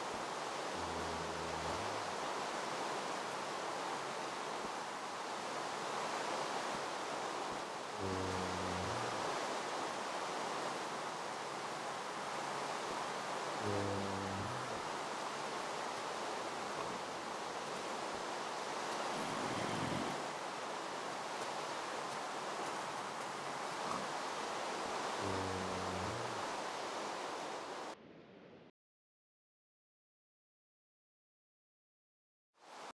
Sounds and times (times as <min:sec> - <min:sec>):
Rain on surface: 0:00.0 - 0:28.0, 0:32.6 - 0:32.9.